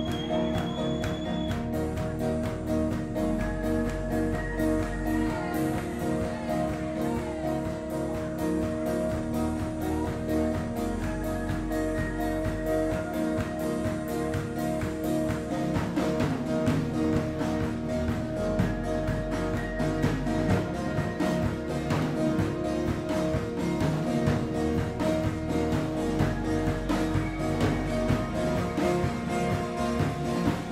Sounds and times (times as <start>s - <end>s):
House music: 0.0s - 30.7s.